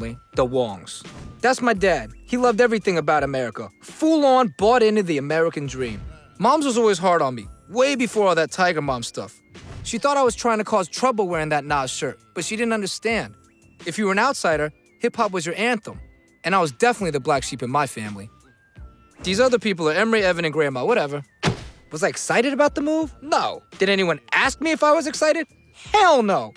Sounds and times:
Speech: 0.0 - 18.3, 19.2 - 21.3, 21.9 - 26.5
Music: 0.0 - 26.5.

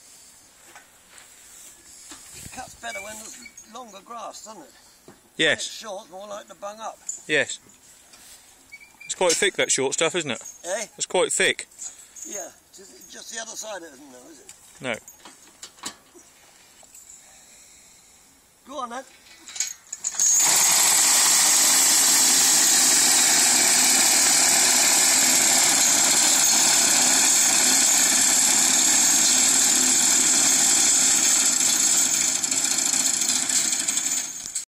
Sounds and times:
Speech: 2.5 - 4.7, 9.1 - 11.7, 12.3 - 15.0, 18.7 - 19.1.

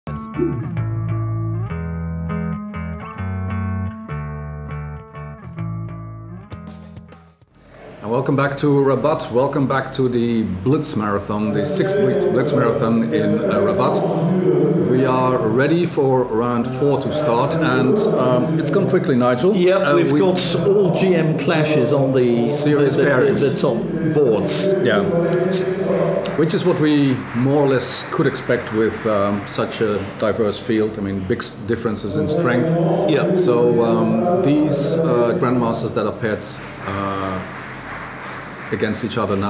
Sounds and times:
Electric guitar: 0.1 - 6.8
Effects unit: 0.1 - 7.5.

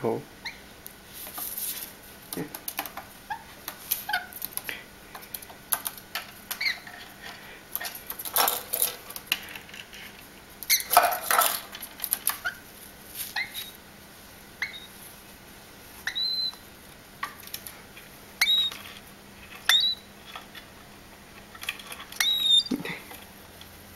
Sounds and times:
Inside, small room: 0.0 - 23.9
Domestic animals, pets: 0.4 - 0.7, 3.3 - 4.8, 6.5 - 8.7, 12.2 - 13.8, 14.6 - 15.1, 16.0 - 16.7, 18.4 - 20.6, 21.6 - 23.3
Bird: 6.5 - 7.0, 14.6 - 15.0, 16.0 - 16.6, 18.4 - 18.8, 19.6 - 20.1, 22.1 - 23.0.

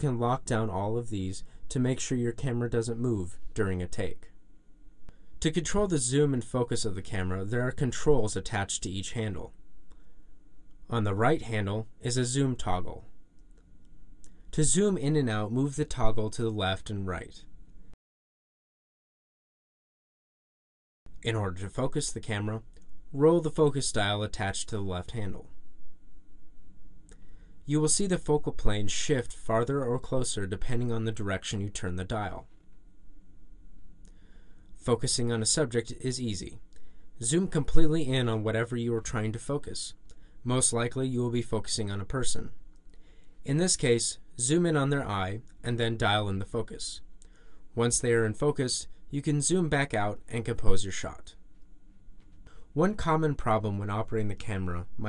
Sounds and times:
Speech: 0.0 - 4.4, 5.4 - 9.6, 10.9 - 13.1, 14.5 - 17.5, 21.2 - 25.6, 27.7 - 32.5, 34.8 - 42.6, 43.4 - 47.1, 47.8 - 51.4, 52.7 - 55.0.

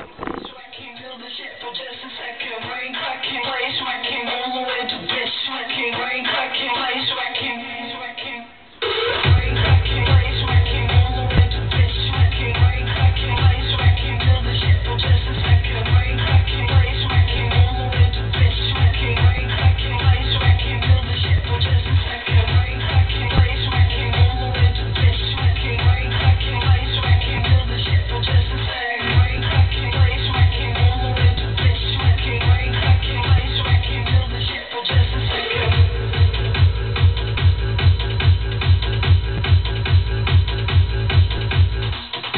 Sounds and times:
Music: 0.0 - 42.3.

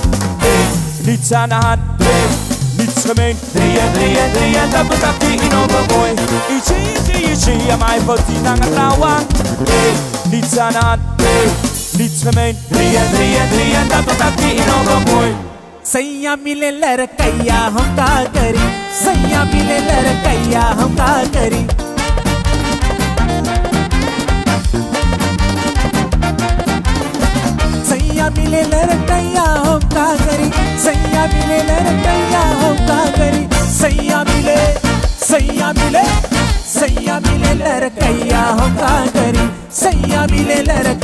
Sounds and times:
Music: 0.0 - 41.0.

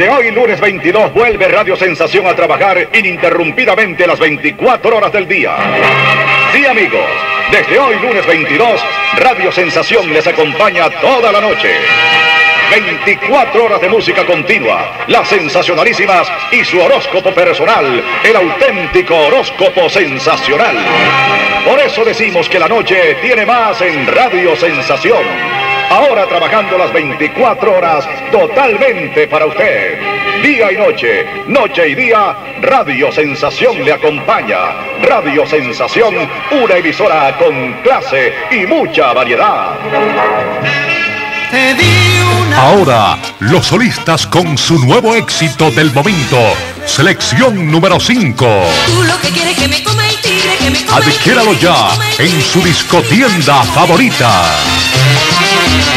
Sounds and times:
Speech: 0.0 - 5.6, 6.5 - 11.9, 12.7 - 21.0, 21.7 - 25.3, 25.9 - 39.8, 42.4 - 49.2, 50.9 - 54.7
Music: 0.0 - 55.9.

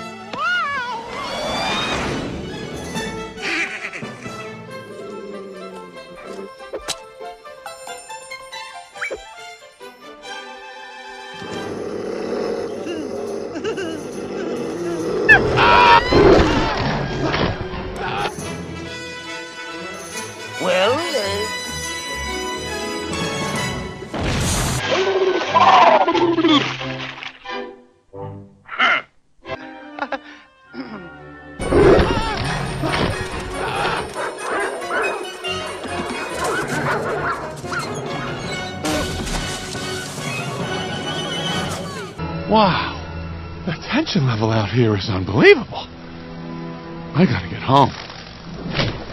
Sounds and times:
Music: 0.0 - 49.1.

